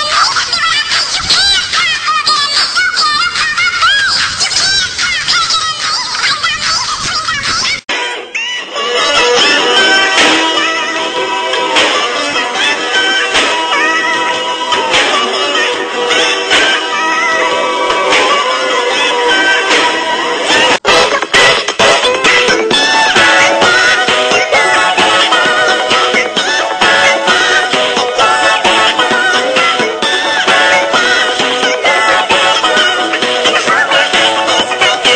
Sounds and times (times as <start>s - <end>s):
Music: 0.0s - 35.1s.